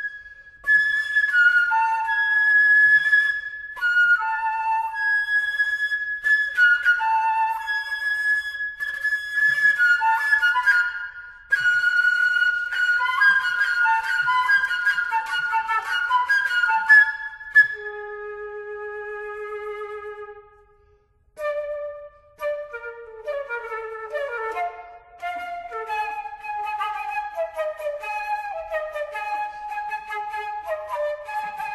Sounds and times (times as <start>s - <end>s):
Flute: 0.0s - 31.7s.